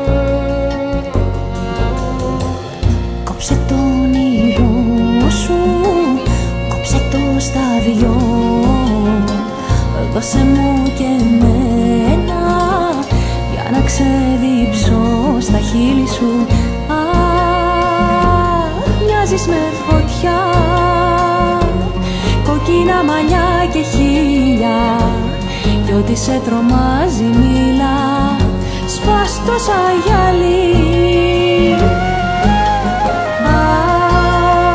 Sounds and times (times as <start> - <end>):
Music: 0.0 - 34.7.